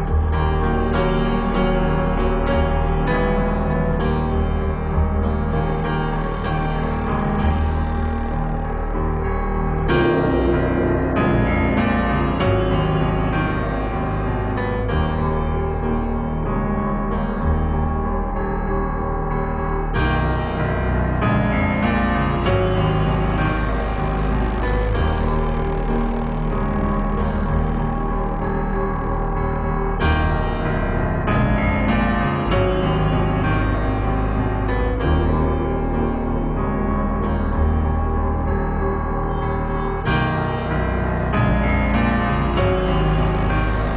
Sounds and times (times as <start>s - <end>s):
Music: 0.0s - 43.9s.